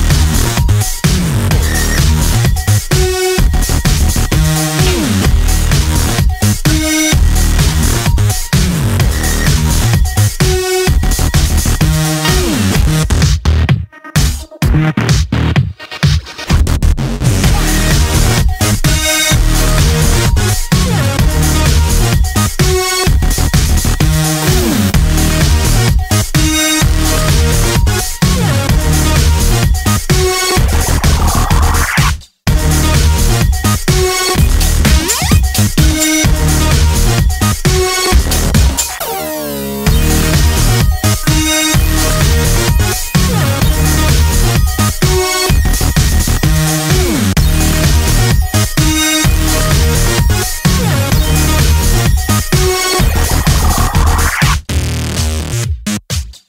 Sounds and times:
Music: 0.0 - 56.4.

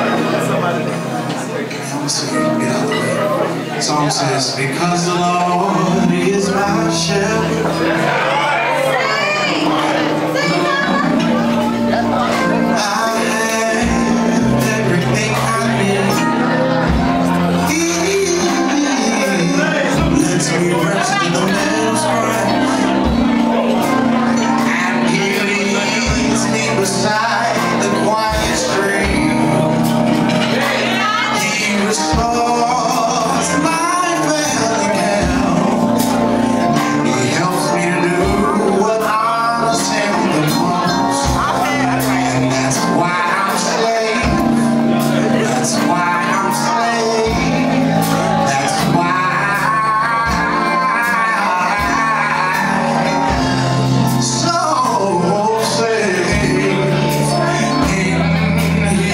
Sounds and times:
Speech: 0.0 - 36.0, 36.7 - 49.6
Music: 0.0 - 59.1
Male singing: 1.8 - 59.1.

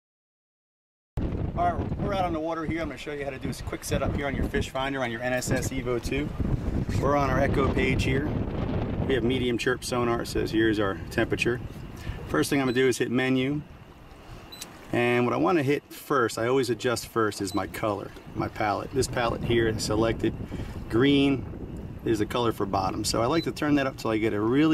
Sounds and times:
Speech: 1.6 - 6.3, 6.9 - 8.3, 9.1 - 11.6, 12.3 - 13.6, 14.9 - 20.3, 20.9 - 21.4, 22.1 - 24.7.

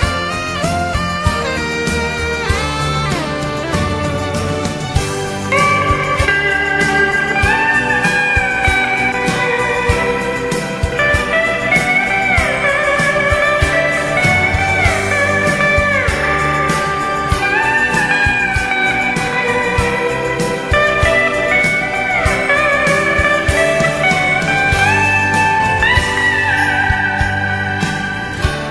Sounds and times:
Steel guitar, slide guitar: 0.0 - 28.7.

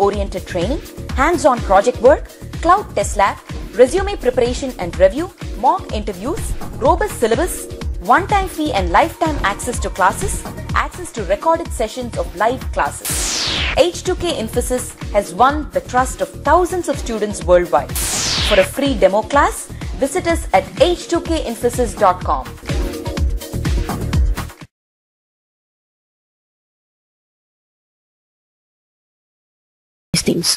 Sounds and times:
Speech: 0.0 - 13.0, 13.8 - 22.5, 30.2 - 30.5
Music: 0.0 - 24.7.

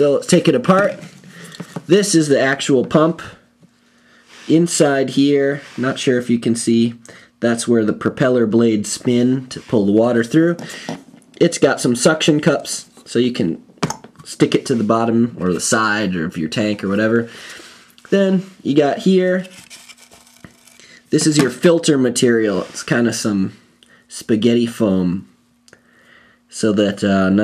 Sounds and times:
Speech: 0.0 - 1.1, 1.9 - 3.4, 4.4 - 10.6, 11.4 - 13.6, 14.2 - 17.3, 18.0 - 19.6, 21.1 - 25.3, 26.5 - 27.4.

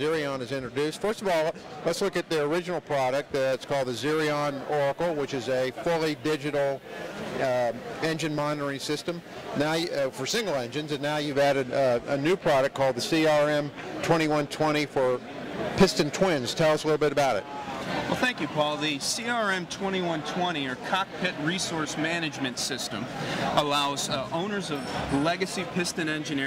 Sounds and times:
Speech: 0.0 - 6.8, 7.4 - 15.2, 18.1 - 26.4.

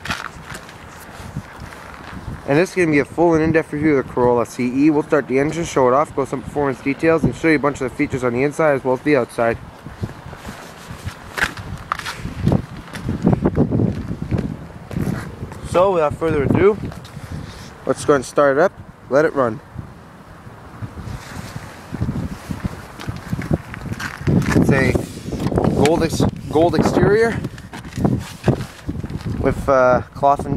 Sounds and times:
Speech: 2.5 - 9.6, 15.6 - 16.8, 17.8 - 19.6, 24.6 - 25.0, 25.8 - 27.4, 29.4 - 30.5.

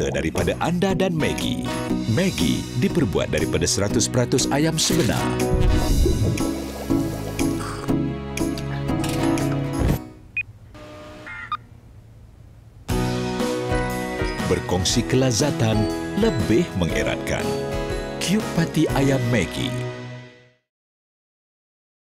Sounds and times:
Speech: 0.0 - 5.4, 14.4 - 17.5, 18.2 - 19.8
Music: 0.0 - 10.3, 12.9 - 20.7.

